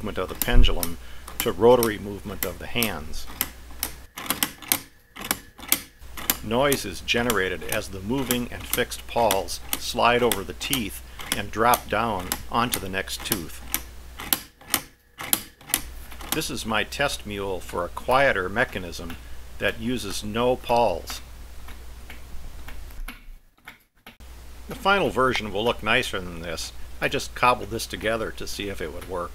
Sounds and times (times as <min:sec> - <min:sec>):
Speech: 0:00.0 - 0:03.3, 0:06.4 - 0:13.6, 0:16.4 - 0:21.3, 0:24.7 - 0:29.3.